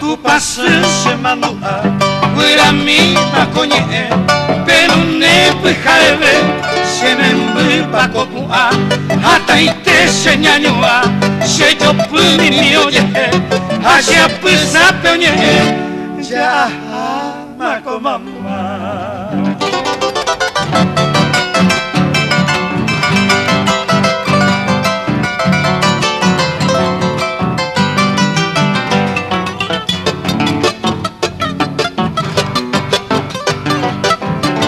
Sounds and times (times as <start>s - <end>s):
Plucked string instrument: 0.0s - 17.2s, 18.3s - 34.6s.